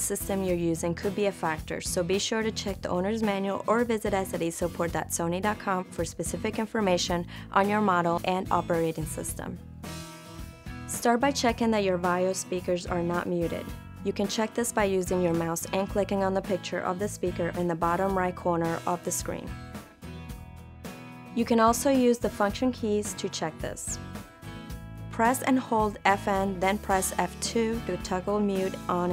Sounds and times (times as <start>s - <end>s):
Speech: 0.0s - 9.6s, 10.9s - 19.5s, 21.4s - 24.0s, 25.2s - 29.1s
Music: 0.0s - 29.1s.